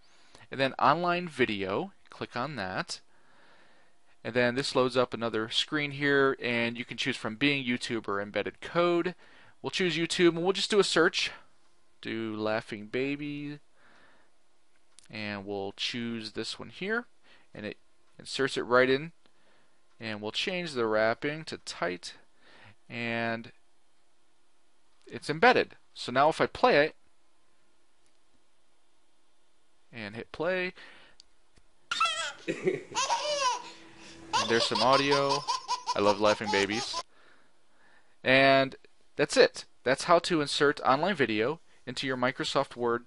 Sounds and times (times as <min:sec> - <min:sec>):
Giggle: 0:32.4 - 0:33.0.